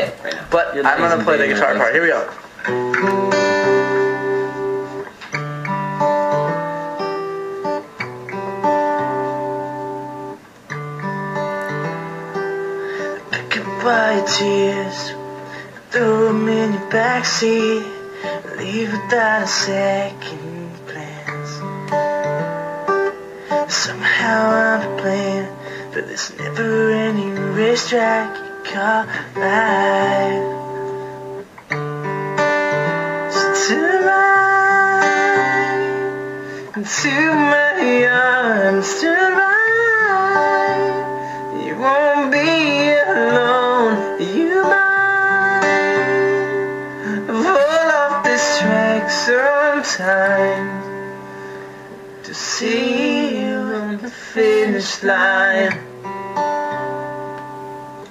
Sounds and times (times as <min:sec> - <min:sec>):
Music: 0:00.0 - 0:58.1
Male singing: 0:13.3 - 0:21.7, 0:23.7 - 0:30.7, 0:33.3 - 0:50.9, 0:52.3 - 0:55.8.